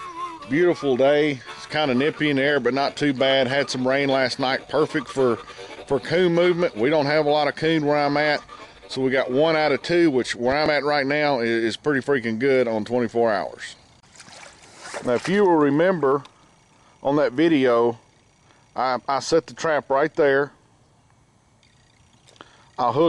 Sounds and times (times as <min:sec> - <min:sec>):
Speech: 0:00.5 - 0:13.8, 0:15.0 - 0:16.2, 0:17.0 - 0:18.0, 0:18.8 - 0:20.6, 0:22.8 - 0:23.0.